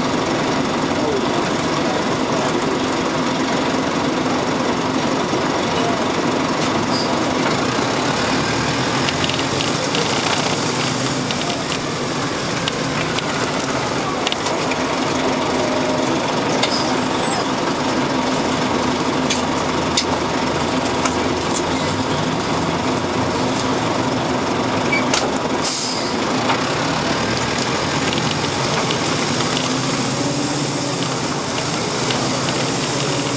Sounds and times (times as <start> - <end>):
Engine knocking: 0.0 - 33.3
Vehicle: 0.0 - 33.3.